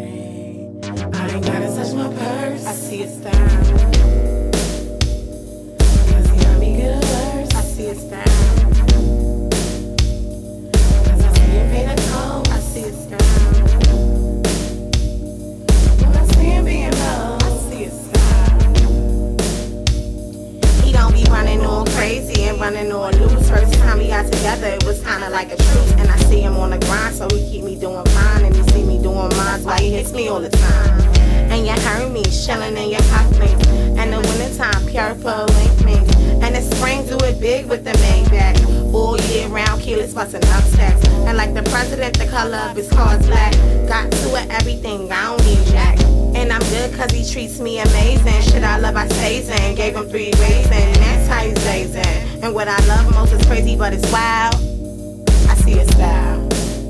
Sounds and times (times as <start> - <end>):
Music: 0.0 - 56.8.